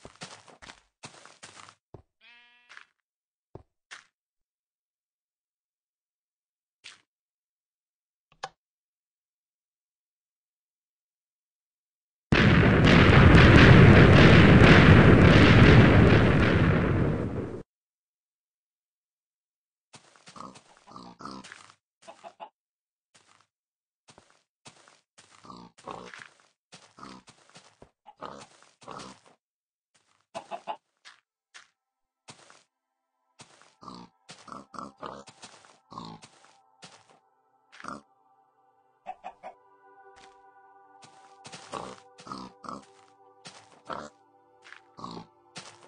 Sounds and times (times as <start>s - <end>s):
Gunshot, gunfire: 12.4s - 17.4s.